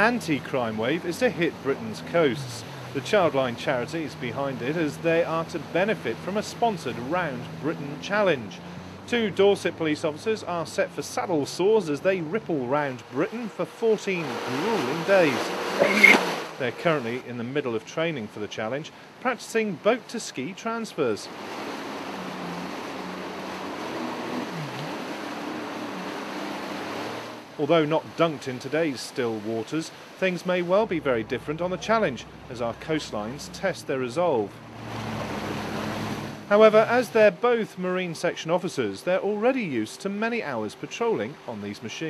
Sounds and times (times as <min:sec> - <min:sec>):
Speech: 0:00.0 - 0:21.3, 0:27.6 - 0:34.6, 0:36.5 - 0:42.1.